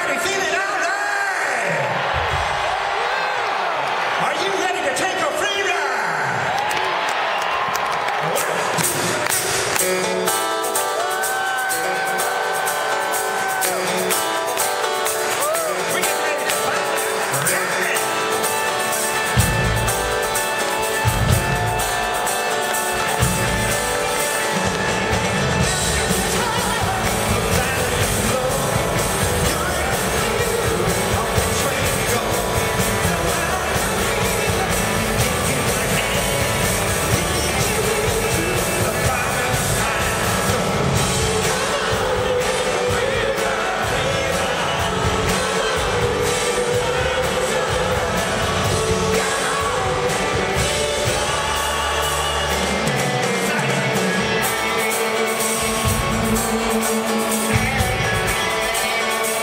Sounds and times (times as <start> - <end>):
Speech: 0.0 - 1.9, 4.2 - 6.5
Music: 0.0 - 59.4.